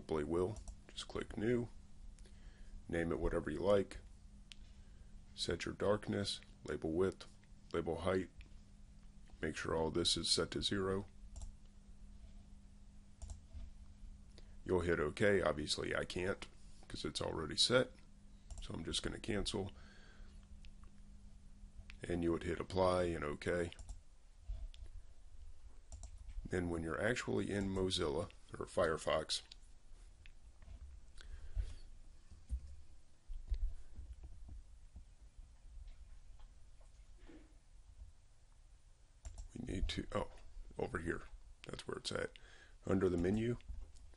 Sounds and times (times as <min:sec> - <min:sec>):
Speech: 0:00.0 - 0:01.8, 0:02.9 - 0:04.0, 0:05.4 - 0:08.4, 0:09.4 - 0:11.1, 0:14.7 - 0:18.0, 0:18.6 - 0:19.8, 0:22.0 - 0:23.8, 0:26.5 - 0:29.6, 0:39.5 - 0:43.7.